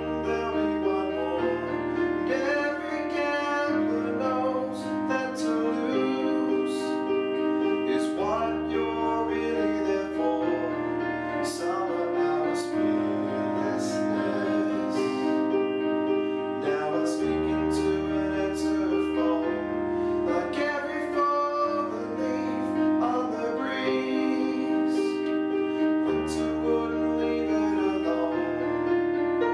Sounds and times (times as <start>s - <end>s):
Music: 0.0s - 29.5s.